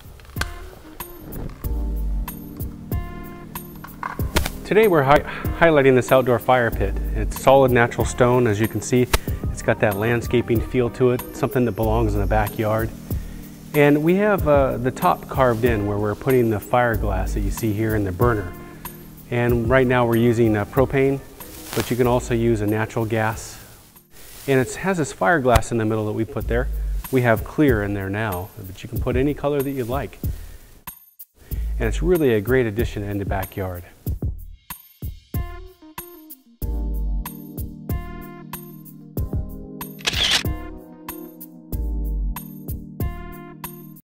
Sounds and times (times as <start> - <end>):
Music: 0.0 - 44.0
Speech: 4.7 - 12.9, 13.8 - 18.6, 19.3 - 21.2, 21.8 - 23.6, 24.5 - 30.2, 31.8 - 34.0.